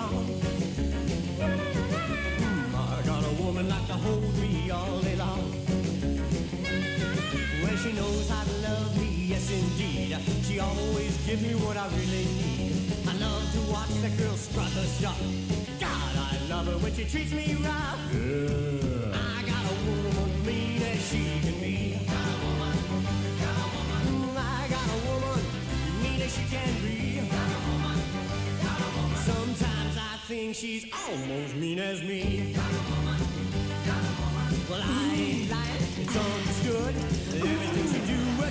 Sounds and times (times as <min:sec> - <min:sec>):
Rock and roll: 0:00.0 - 0:38.5.